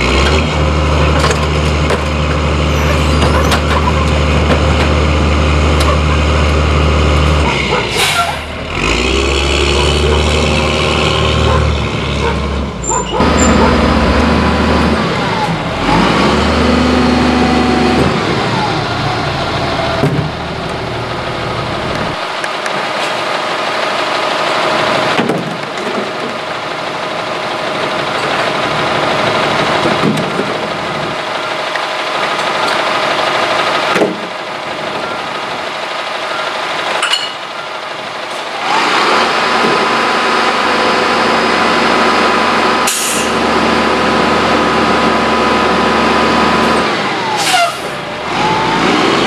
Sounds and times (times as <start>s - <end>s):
Truck: 0.0s - 49.2s.